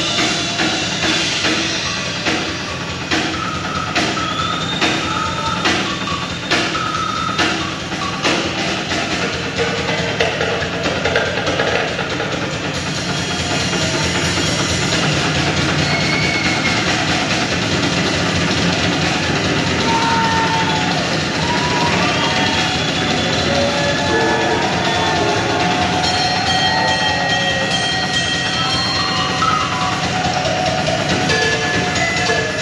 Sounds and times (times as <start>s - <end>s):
Drum: 0.0s - 32.6s
Drum kit: 0.0s - 32.6s.